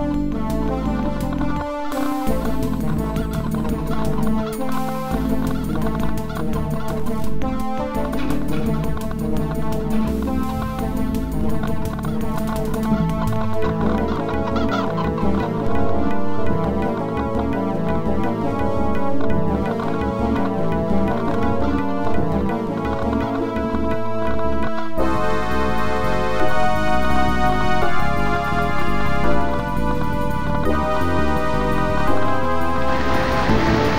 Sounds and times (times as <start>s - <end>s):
Cluck: 12.0s - 15.8s.